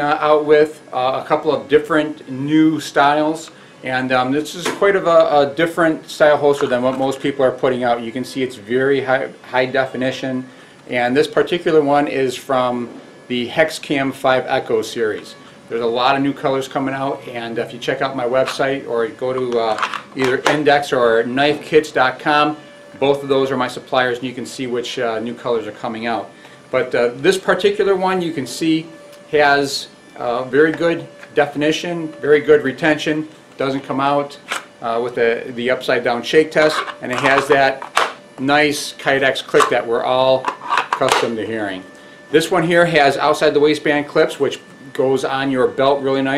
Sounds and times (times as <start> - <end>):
Speech: 0.0 - 37.8, 38.4 - 46.3.